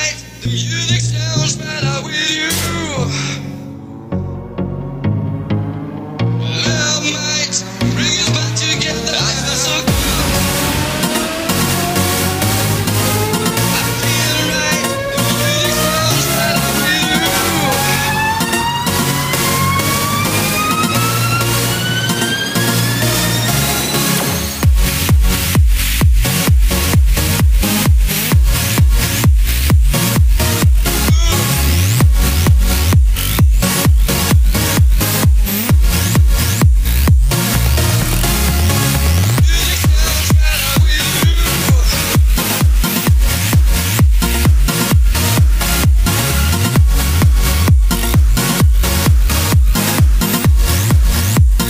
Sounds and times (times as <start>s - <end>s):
Exciting music: 0.0s - 51.6s.